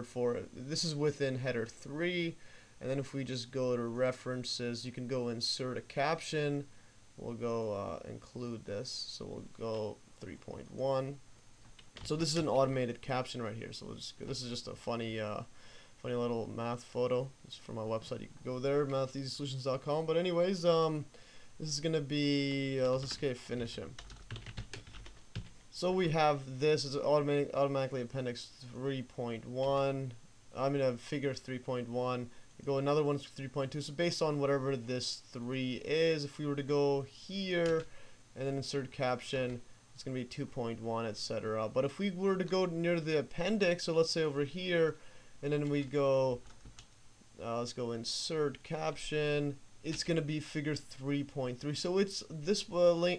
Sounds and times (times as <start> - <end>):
Computer keyboard: 24.0 - 25.5.